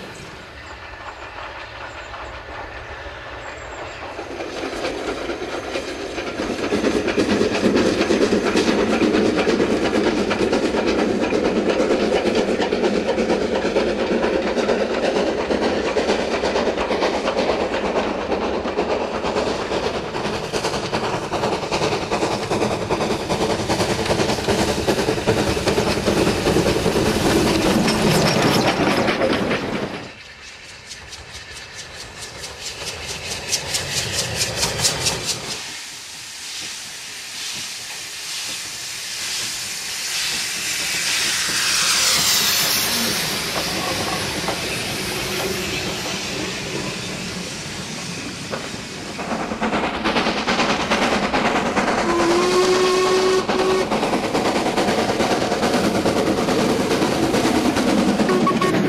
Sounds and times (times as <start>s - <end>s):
Hiss: 0.0s - 58.3s.